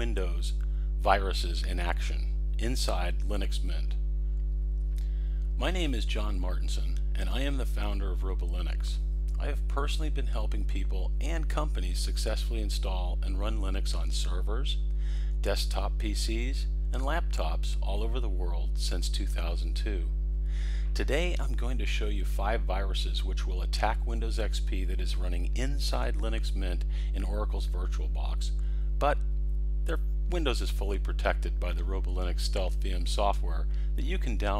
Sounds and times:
Speech: 0.0 - 4.0, 5.6 - 20.1, 20.9 - 29.2, 29.9 - 34.5.

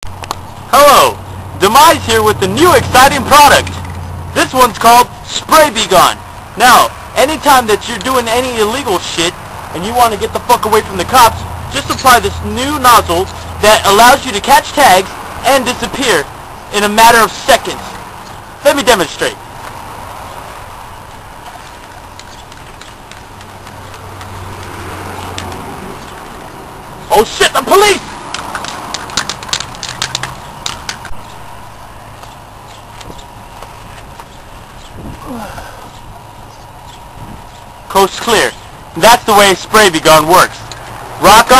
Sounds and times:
Speech: 0.7 - 3.8, 4.4 - 18.0, 18.6 - 19.4, 27.1 - 28.1, 37.9 - 40.6, 41.2 - 41.5.

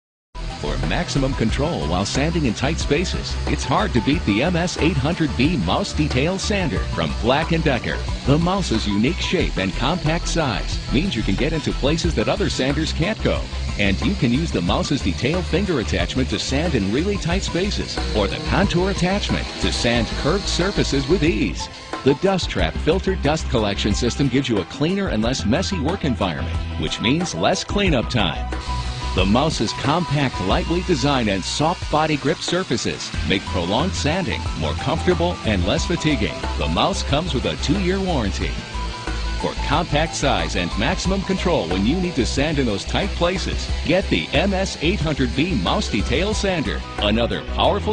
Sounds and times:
Music: 0.4 - 47.9
Speech: 0.6 - 28.5, 29.2 - 38.6, 39.4 - 47.9.

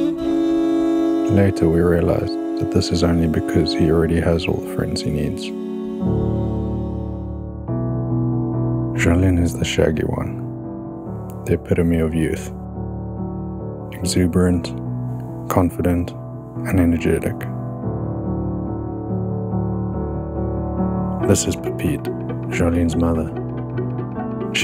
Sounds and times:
Music: 0.0 - 24.6
Speech: 1.3 - 5.6, 9.0 - 10.5, 11.4 - 12.6, 13.9 - 14.8, 15.5 - 17.6, 21.2 - 23.4.

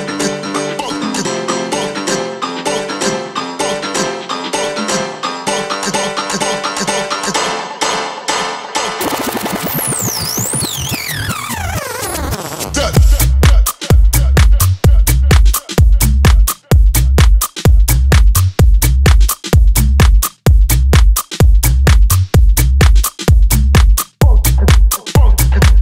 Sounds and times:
Funk: 11.0 - 25.8.

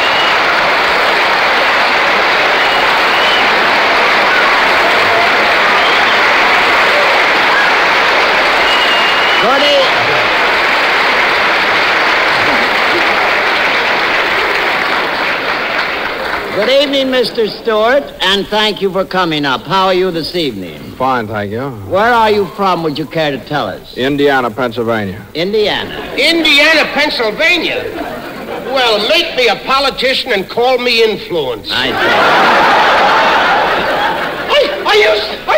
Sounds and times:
Speech: 16.5 - 27.9, 28.6 - 32.1, 34.5 - 35.5.

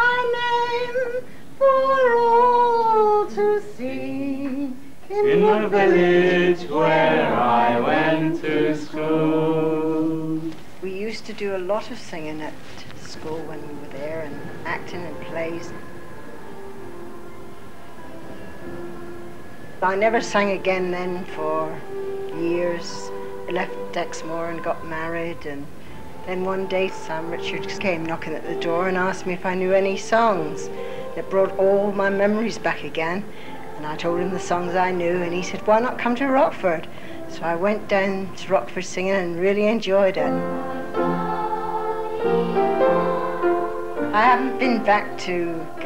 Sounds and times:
Chant: 0.0 - 10.7, 12.7 - 45.8.

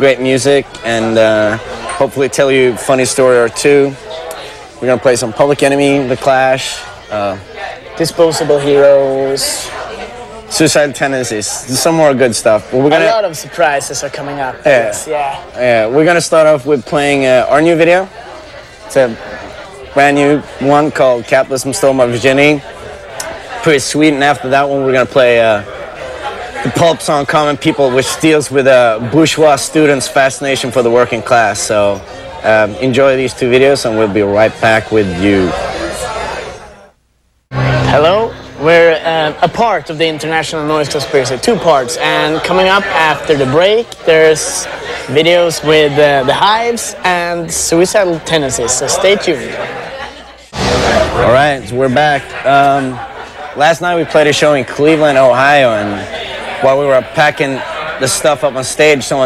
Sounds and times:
Speech: 0.0 - 18.2, 18.8 - 36.5, 37.6 - 59.2.

